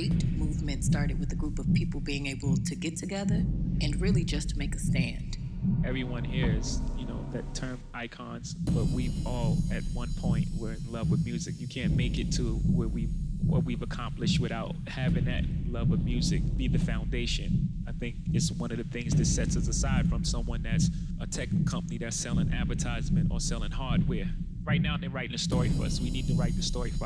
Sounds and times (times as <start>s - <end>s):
Heart sounds, heartbeat: 0.0s - 7.8s, 8.5s - 27.0s
Speech: 0.0s - 27.0s.